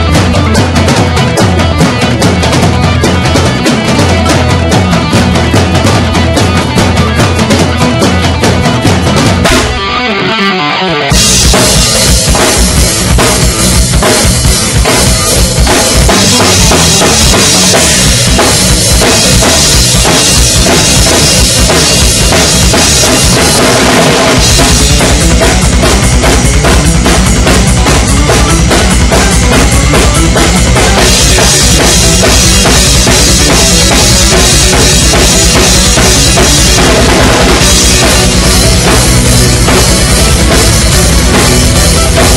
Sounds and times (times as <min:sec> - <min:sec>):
Drum: 0:00.0 - 0:10.4, 0:11.1 - 0:42.3
Drum kit: 0:00.0 - 0:42.3.